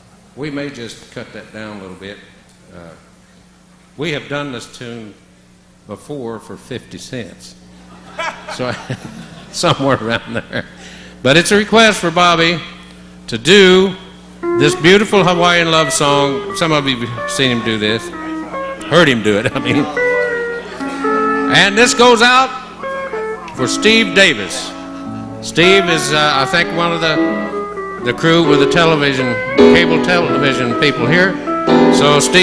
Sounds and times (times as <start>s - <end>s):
Speech: 0.4s - 3.1s, 4.0s - 5.2s, 5.9s - 7.6s, 11.3s - 18.2s, 18.9s - 20.0s, 21.5s - 22.6s, 23.6s - 24.8s, 25.5s - 27.3s, 28.0s - 31.4s, 32.0s - 32.4s
Music: 14.4s - 32.4s.